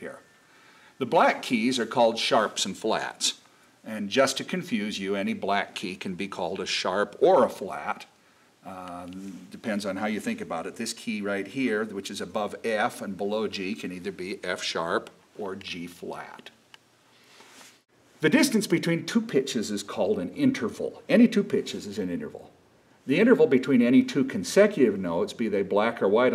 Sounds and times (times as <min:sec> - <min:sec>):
Speech: 0:00.0 - 0:00.3, 0:01.0 - 0:16.6, 0:18.2 - 0:26.3.